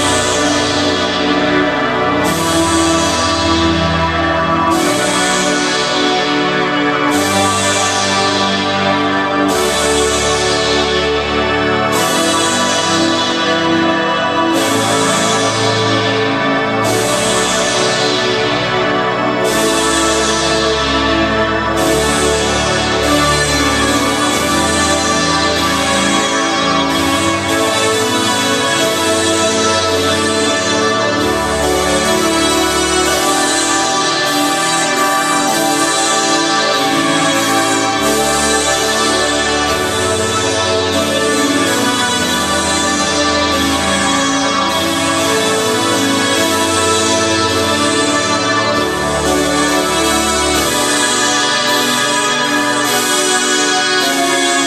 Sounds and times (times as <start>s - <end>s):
Music: 0.0s - 54.6s.